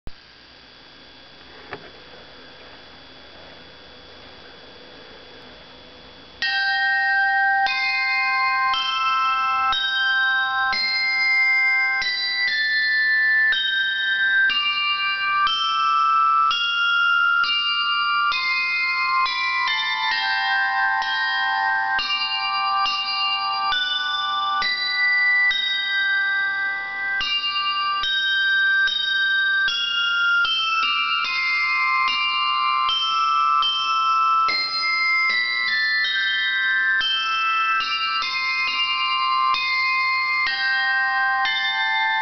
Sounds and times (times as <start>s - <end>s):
Bell: 0.5s - 42.2s.